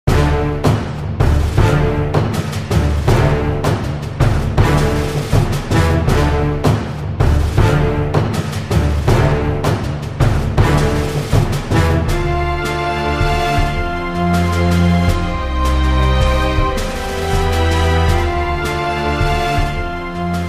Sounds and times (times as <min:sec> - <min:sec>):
Theme music: 0:00.1 - 0:20.4.